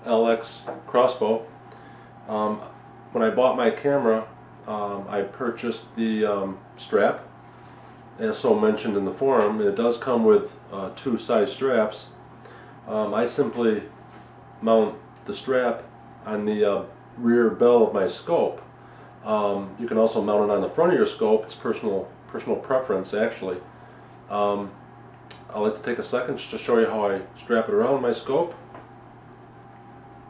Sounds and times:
Speech: 0:00.0 - 0:01.5, 0:02.3 - 0:07.3, 0:08.2 - 0:12.2, 0:12.8 - 0:14.0, 0:14.6 - 0:23.7, 0:24.3 - 0:28.7.

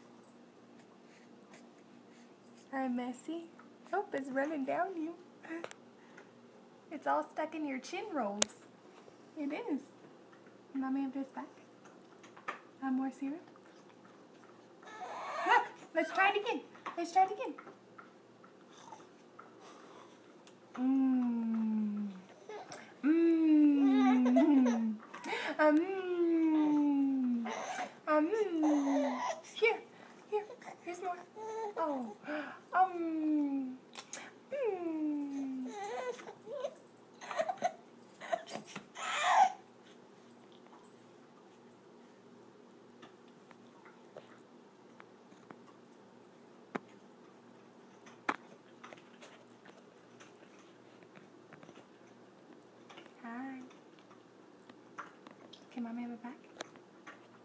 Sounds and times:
Crying, sobbing: 0:14.8 - 0:15.8, 0:22.3 - 0:25.6, 0:26.2 - 0:29.5, 0:34.5 - 0:39.6.

